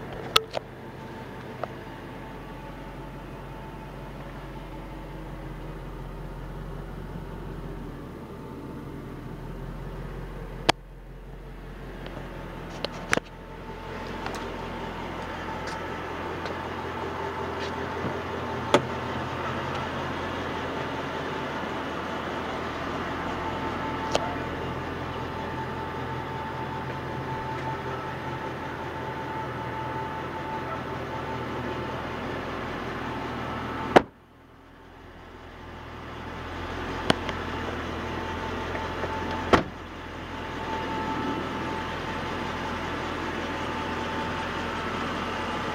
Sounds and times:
Vehicle: 0:00.0 - 0:45.7.

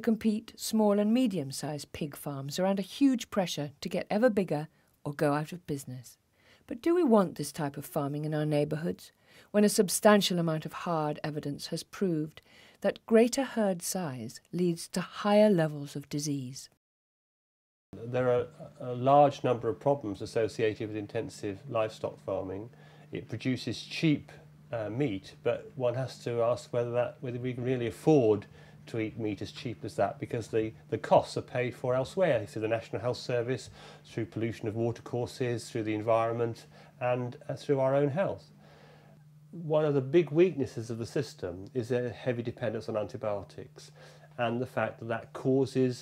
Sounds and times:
Speech: 0:00.0 - 0:16.8, 0:18.0 - 0:38.5, 0:39.6 - 0:46.0.

